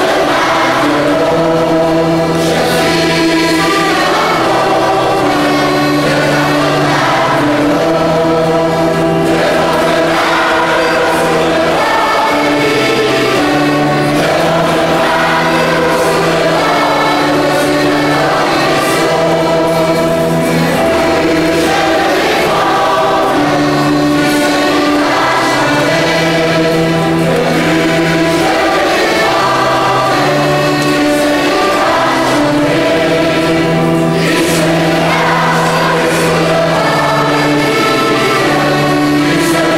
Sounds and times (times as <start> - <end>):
Music: 0.0 - 39.7.